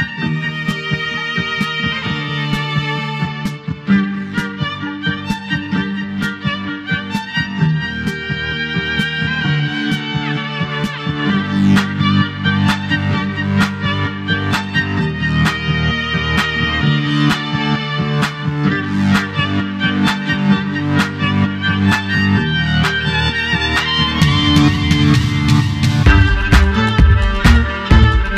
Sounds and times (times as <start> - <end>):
Violin, fiddle: 0.0 - 28.3.